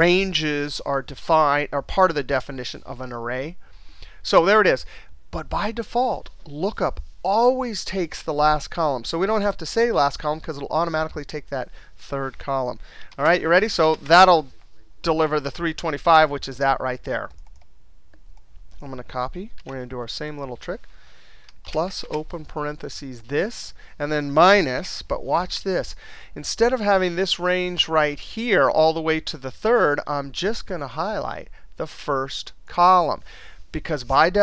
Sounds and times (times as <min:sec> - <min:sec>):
Speech: 0:00.0 - 0:03.6, 0:04.2 - 0:17.4, 0:18.8 - 0:20.8, 0:21.7 - 0:34.4
Inside, small room: 0:00.0 - 0:34.4
Clicking: 0:17.3 - 0:18.5.